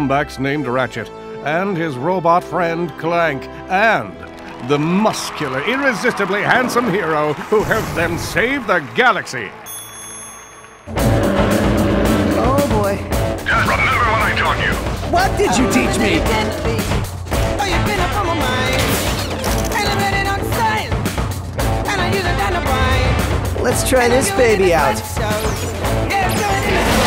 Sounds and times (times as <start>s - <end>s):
Speech: 0.0s - 9.5s, 12.4s - 16.8s
Music: 0.0s - 27.0s.